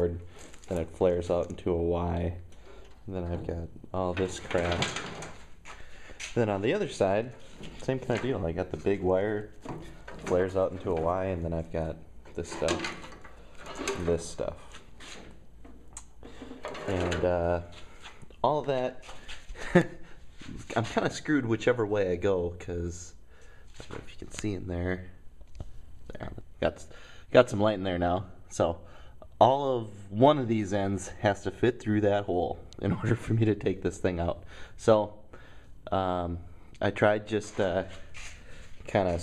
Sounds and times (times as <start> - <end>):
Speech: 0.0 - 2.4, 3.1 - 5.1, 6.3 - 9.6, 10.2 - 13.0, 13.8 - 14.7, 16.8 - 17.8, 18.4 - 19.1, 20.5 - 23.2, 23.8 - 25.2, 26.1 - 35.2, 35.9 - 38.0, 38.9 - 39.2.